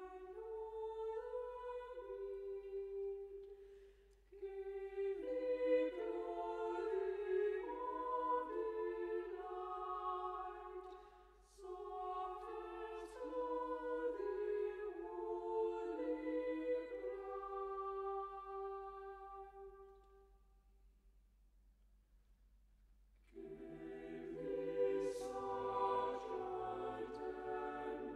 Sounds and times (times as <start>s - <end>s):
Music: 0.0s - 20.7s, 23.2s - 28.1s.